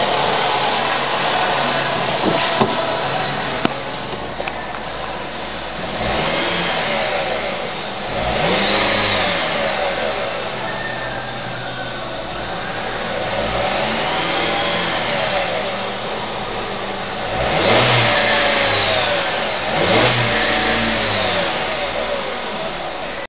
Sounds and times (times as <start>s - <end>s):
Car: 0.0s - 23.2s
Accelerating, revving, vroom: 5.8s - 10.4s, 13.1s - 15.8s, 17.2s - 22.5s.